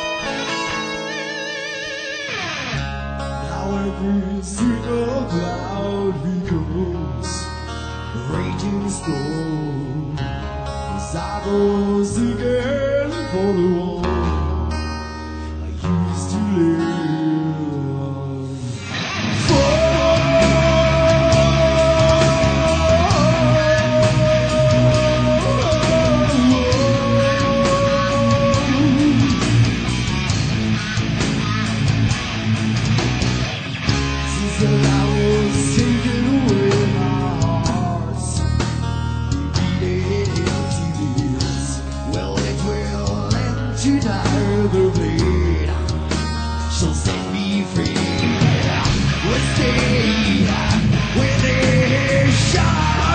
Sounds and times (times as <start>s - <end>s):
Music: 0.0s - 53.1s.